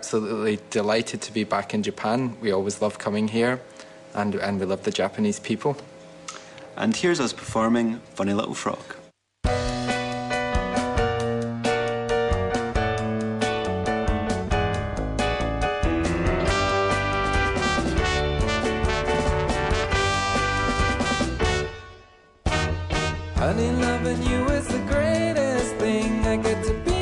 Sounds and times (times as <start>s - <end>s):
Speech: 0.0s - 3.6s, 4.2s - 5.9s, 6.8s - 9.1s
Music: 9.4s - 27.0s.